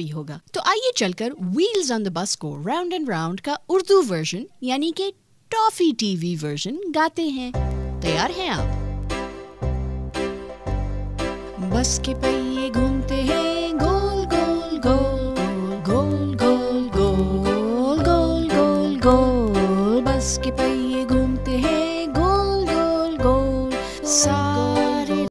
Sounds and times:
Music: 7.4s - 25.3s.

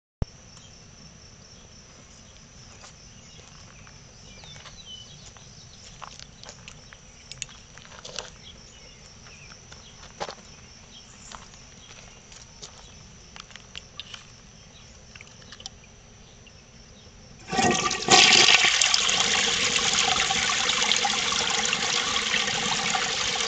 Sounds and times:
Outside, rural or natural: 0.2s - 23.4s.

